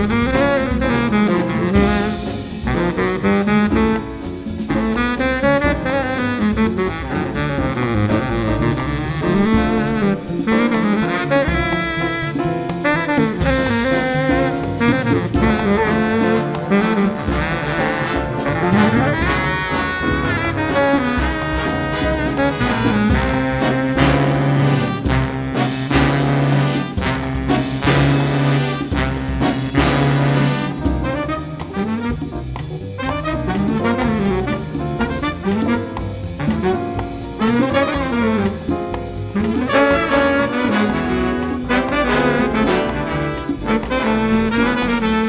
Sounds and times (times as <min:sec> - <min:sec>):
Orchestra: 0:00.0 - 0:45.2
Saxophone: 0:00.0 - 0:45.2
Trombone: 0:00.0 - 0:45.2
Trumpet: 0:00.0 - 0:45.2.